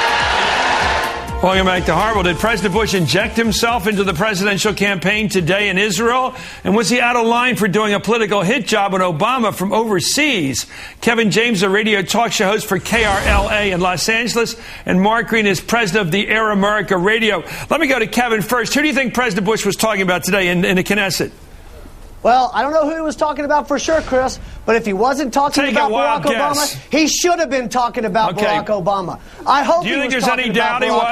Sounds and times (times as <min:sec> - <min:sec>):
Speech: 0:01.4 - 0:21.4, 0:22.2 - 0:31.1.